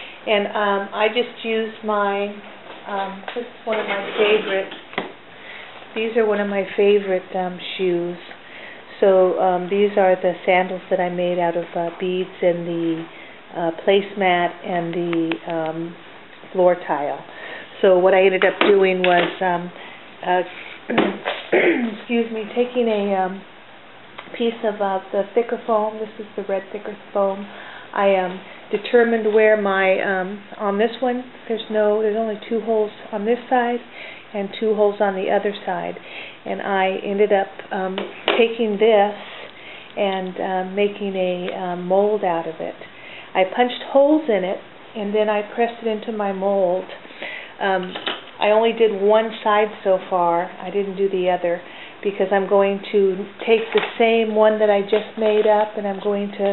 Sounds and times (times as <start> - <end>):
Inside, small room: 0.0 - 56.5
Speech: 0.2 - 4.8, 6.0 - 23.5, 24.2 - 39.2, 40.0 - 47.0, 47.6 - 56.5.